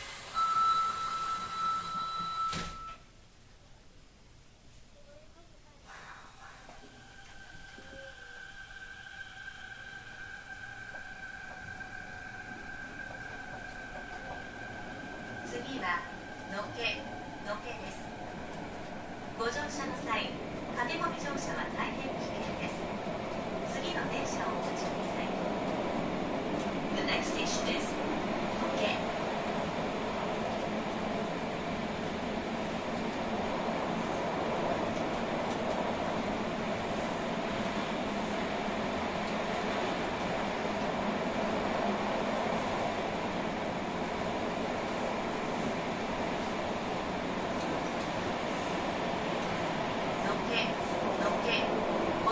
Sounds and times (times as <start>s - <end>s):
Rail transport: 0.0s - 3.4s, 4.5s - 52.3s
Speech: 5.0s - 6.8s, 27.0s - 28.0s, 28.6s - 29.0s, 50.2s - 51.7s.